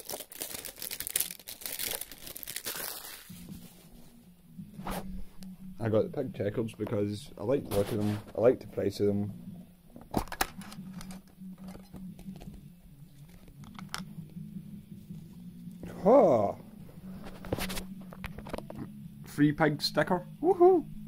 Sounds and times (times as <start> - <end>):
Speech: 5.8 - 9.3, 19.3 - 20.8.